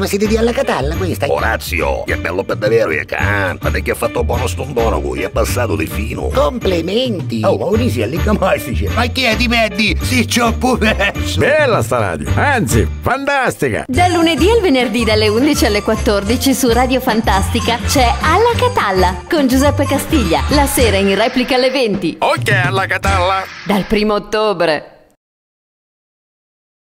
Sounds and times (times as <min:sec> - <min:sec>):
Music: 0:00.0 - 0:23.5
Speech: 0:00.0 - 0:24.9.